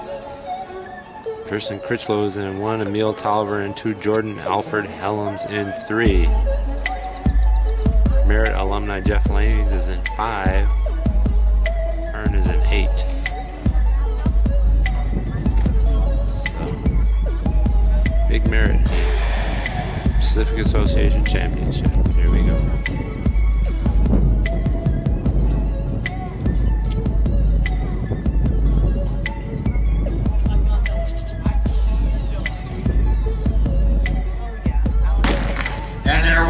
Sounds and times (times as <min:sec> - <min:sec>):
Music: 0:00.0 - 0:36.4.